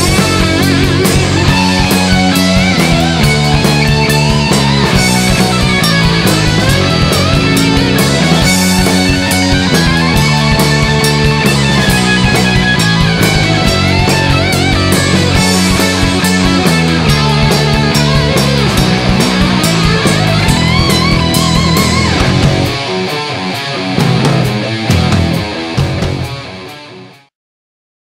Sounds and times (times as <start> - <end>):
Electric guitar: 0.0 - 27.3.